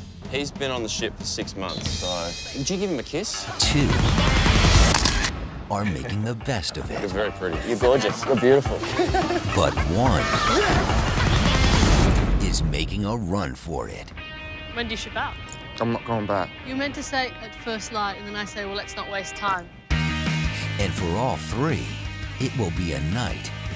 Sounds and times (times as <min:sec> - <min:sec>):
Music: 0:00.0 - 0:23.7.